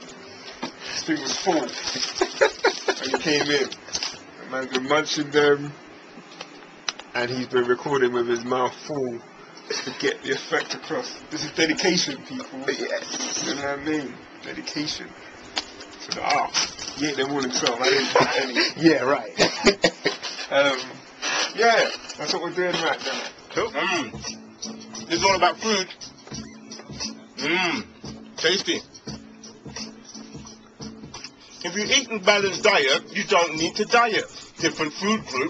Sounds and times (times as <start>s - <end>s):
Music: 0.0s - 5.5s, 9.3s - 35.5s
Inside, small room: 0.0s - 35.5s
Speech: 1.0s - 1.8s, 4.4s - 5.8s, 7.1s - 9.2s, 10.0s - 15.1s, 21.6s - 24.1s, 31.6s - 35.5s.